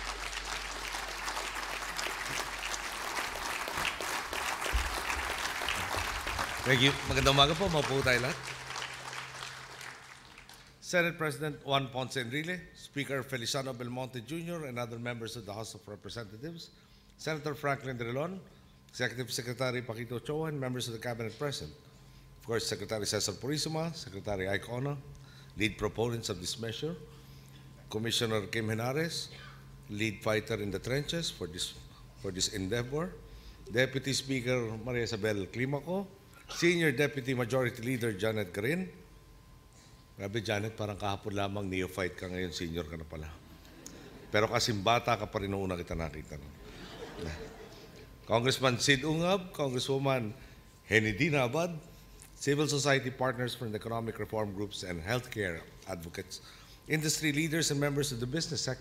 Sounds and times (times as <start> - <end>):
Narration, monologue: 5.9 - 58.8
Male speech, man speaking: 6.6 - 8.4, 10.8 - 21.8, 22.4 - 27.0, 27.9 - 29.3, 29.9 - 39.0, 40.2 - 43.4, 44.3 - 46.5, 48.3 - 51.8, 52.4 - 58.8.